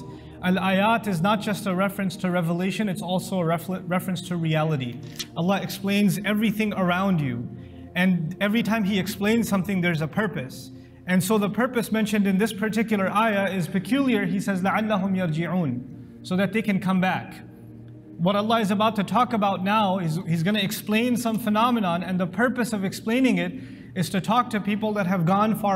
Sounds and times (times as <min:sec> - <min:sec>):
Speech: 0:00.0 - 0:17.5, 0:18.2 - 0:25.7
Music: 0:00.0 - 0:25.7.